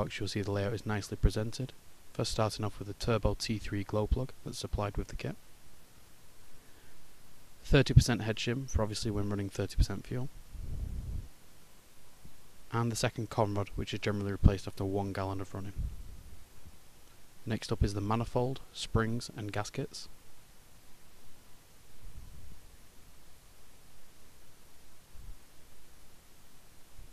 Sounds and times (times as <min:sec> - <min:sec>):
Speech: 0:00.0 - 0:05.4, 0:07.6 - 0:10.3, 0:12.7 - 0:15.8, 0:17.5 - 0:20.1.